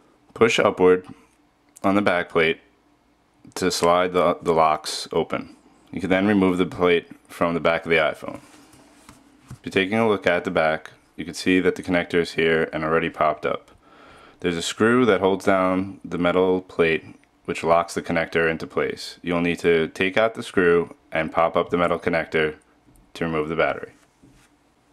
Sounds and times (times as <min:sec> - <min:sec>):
Speech: 0:00.4 - 0:01.2, 0:01.8 - 0:02.7, 0:03.5 - 0:08.5, 0:09.6 - 0:13.7, 0:14.4 - 0:24.0.